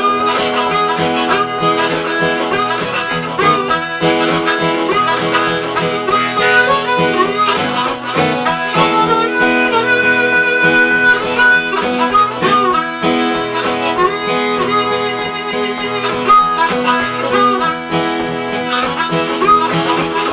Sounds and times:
Music: 0.0s - 20.3s.

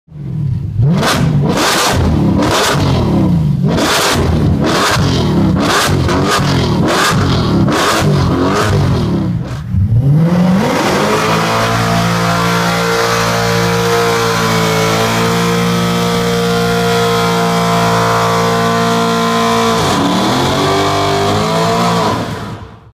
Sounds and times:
Car: 0.1s - 22.9s.

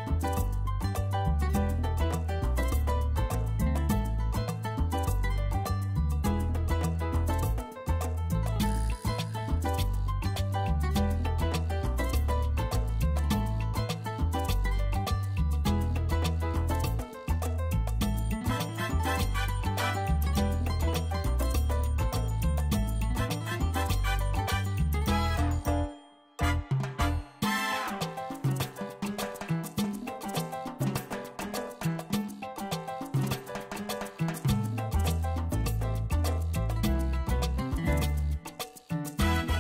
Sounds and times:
Music: 0.0s - 39.6s.

